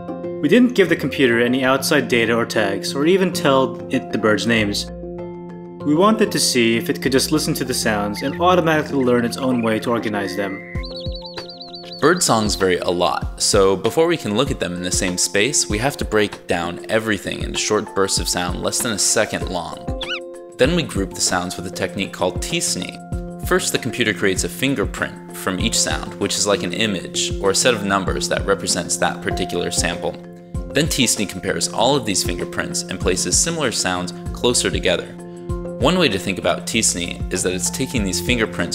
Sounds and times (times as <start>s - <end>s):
Music: 0.0s - 38.7s
Speech: 0.4s - 4.9s, 5.8s - 10.6s, 12.0s - 19.9s, 20.6s - 35.2s, 35.8s - 38.7s
Bird vocalization, bird call, bird song: 8.1s - 12.8s, 19.9s - 20.3s.